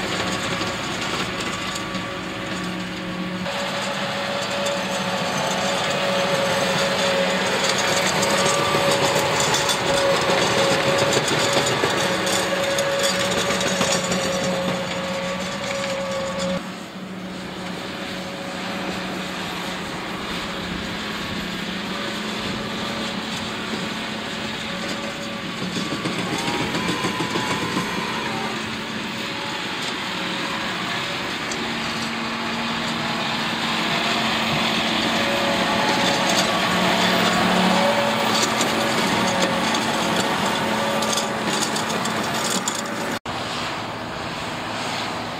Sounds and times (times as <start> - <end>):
Vehicle: 0.0 - 45.3.